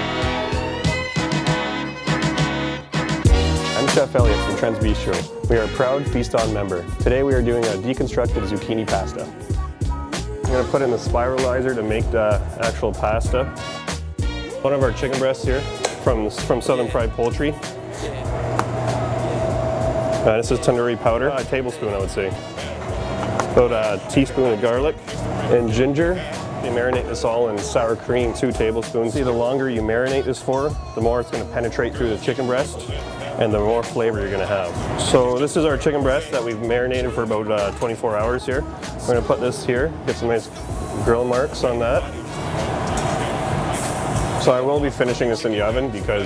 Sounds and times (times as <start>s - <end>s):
Music: 0.0s - 46.2s
Speech: 3.8s - 9.4s, 10.5s - 13.5s, 14.6s - 18.3s, 20.2s - 22.4s, 23.6s - 42.2s, 44.4s - 46.2s.